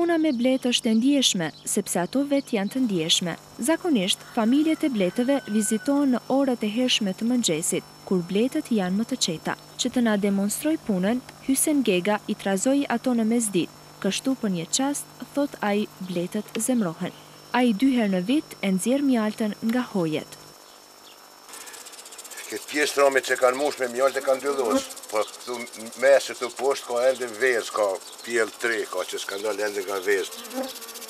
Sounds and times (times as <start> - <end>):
Speech: 0.0 - 20.4, 22.4 - 30.4
Bee, wasp, etc.: 0.0 - 31.0.